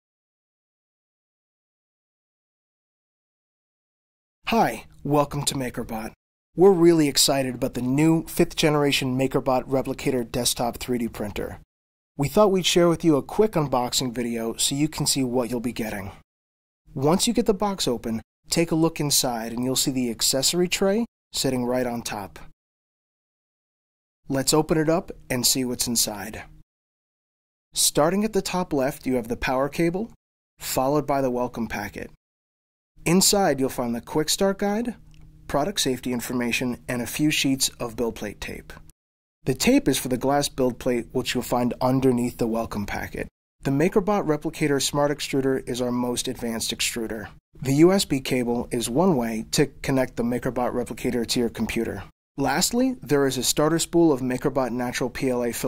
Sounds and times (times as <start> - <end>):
Speech: 4.5 - 11.6, 12.2 - 16.2, 16.9 - 22.5, 24.3 - 26.5, 27.8 - 32.2, 33.1 - 38.8, 39.5 - 55.6.